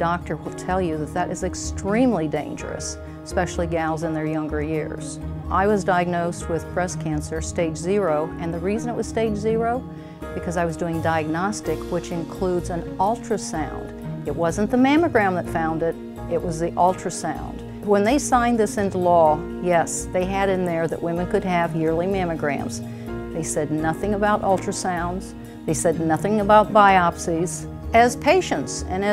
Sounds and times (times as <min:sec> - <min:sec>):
Speech: 0:00.0 - 0:09.8, 0:10.4 - 0:22.8, 0:23.4 - 0:29.1
Music: 0:00.0 - 0:29.1.